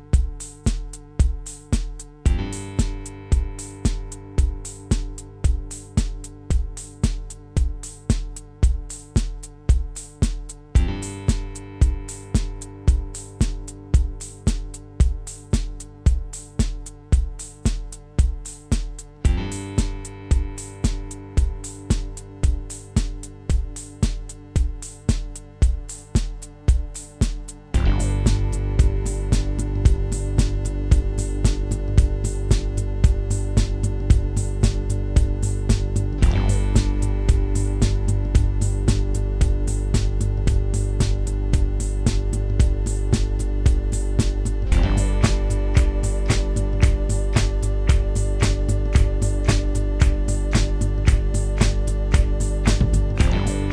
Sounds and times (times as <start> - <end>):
Drum machine: 0.0 - 53.7
Sampler: 0.0 - 53.7.